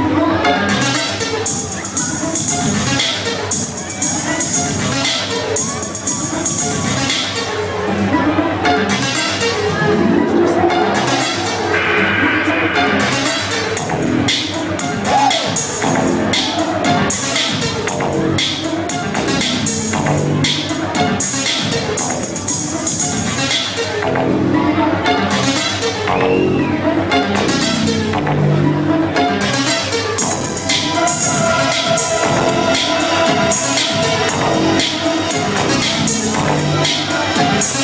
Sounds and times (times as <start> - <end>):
Techno: 0.0 - 24.6, 25.4 - 37.8
House music: 0.7 - 24.2, 25.4 - 37.8
Electronica: 2.0 - 24.5, 27.3 - 37.8.